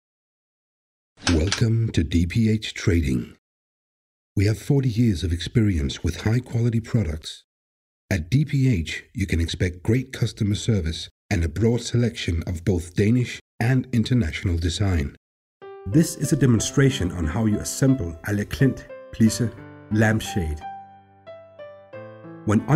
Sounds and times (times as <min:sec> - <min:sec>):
Speech: 0:01.2 - 0:03.4, 0:04.4 - 0:07.5, 0:08.1 - 0:15.2, 0:15.9 - 0:20.7, 0:22.5 - 0:22.7.